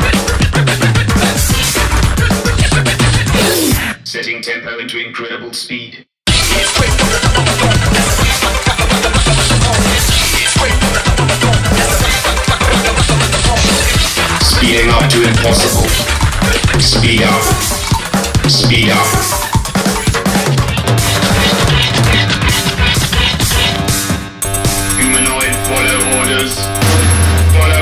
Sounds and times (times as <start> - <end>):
Drum: 0.0 - 3.8, 6.3 - 27.8
Drum kit: 0.0 - 3.9, 6.3 - 27.8.